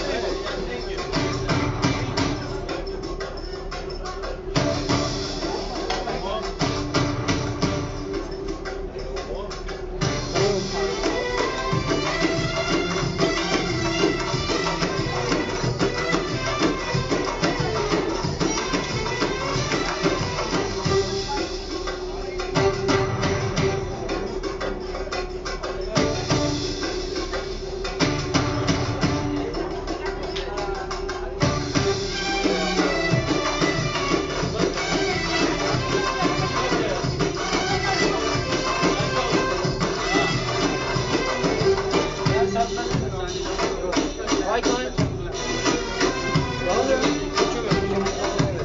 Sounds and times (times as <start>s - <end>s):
Speech: 0.0s - 4.7s, 5.3s - 6.8s, 8.8s - 11.7s, 19.3s - 22.6s, 28.9s - 31.8s, 32.4s - 33.6s, 34.2s - 40.2s, 41.5s - 48.6s
Music: 0.0s - 48.6s.